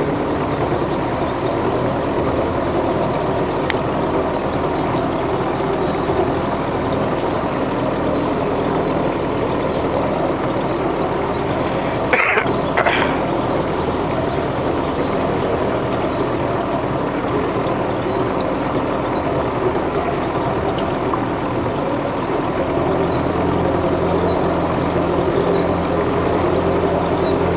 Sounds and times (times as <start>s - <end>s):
Sailboat, sailing ship: 0.0s - 27.5s.